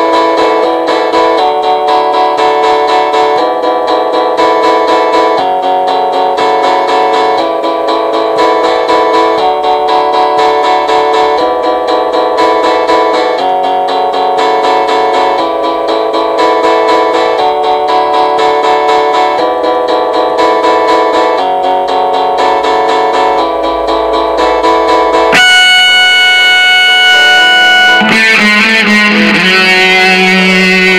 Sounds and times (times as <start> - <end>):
Electric guitar: 0.0 - 30.9
Strum: 7.1 - 30.9.